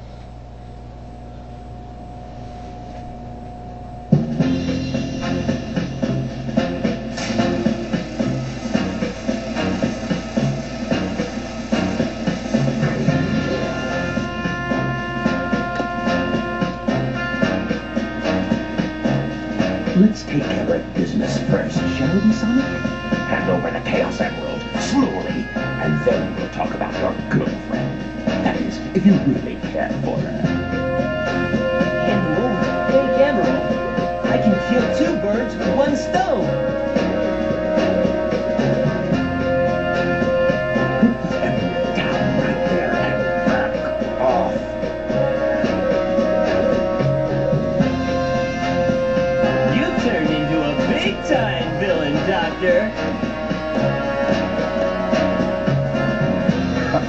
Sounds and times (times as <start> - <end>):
Music: 0.0 - 57.0
Speech: 20.0 - 27.8, 28.4 - 30.5, 32.0 - 36.6, 41.3 - 44.7, 49.5 - 53.0.